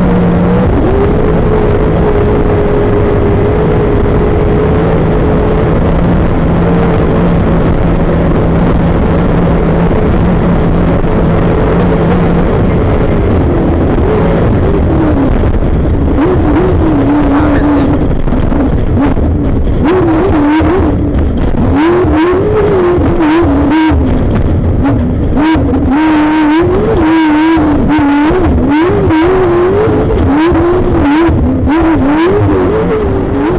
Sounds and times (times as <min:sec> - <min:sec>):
Car: 0:00.0 - 0:33.5
Speech: 0:17.2 - 0:17.9.